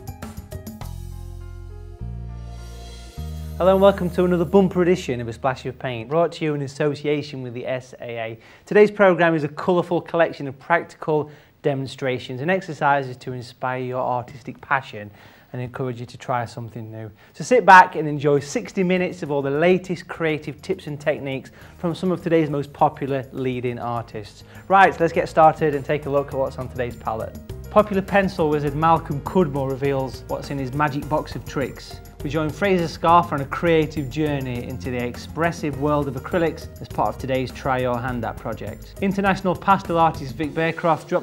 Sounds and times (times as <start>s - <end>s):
Music: 0.0s - 8.0s, 17.6s - 41.2s
Speech: 3.6s - 41.2s.